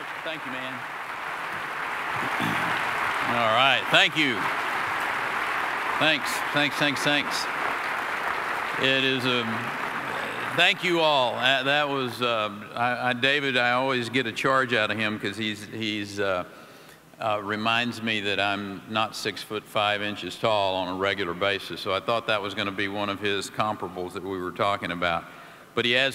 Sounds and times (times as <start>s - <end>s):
Male speech, man speaking: 0.3s - 0.8s, 3.3s - 4.5s, 6.0s - 7.5s, 8.8s - 9.6s, 10.6s - 16.5s, 17.2s - 26.1s
Narration, monologue: 6.0s - 7.5s, 8.8s - 26.1s.